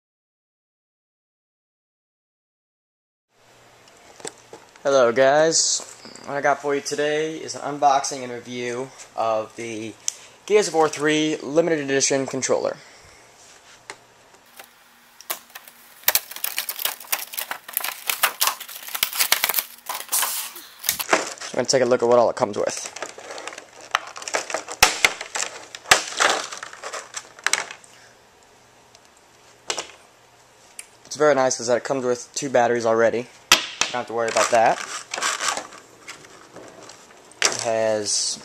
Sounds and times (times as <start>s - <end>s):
Speech: 4.8s - 12.8s, 21.5s - 23.0s, 31.1s - 33.3s, 34.0s - 34.8s, 37.5s - 38.4s.